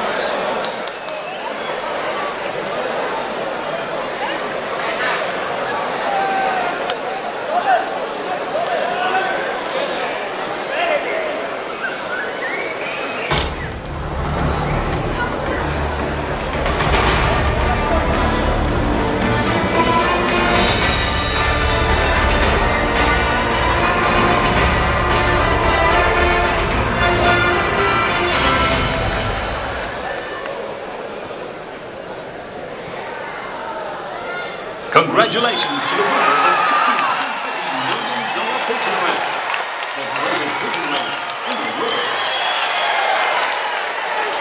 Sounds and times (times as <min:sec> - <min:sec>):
Music: 0:13.4 - 0:30.1.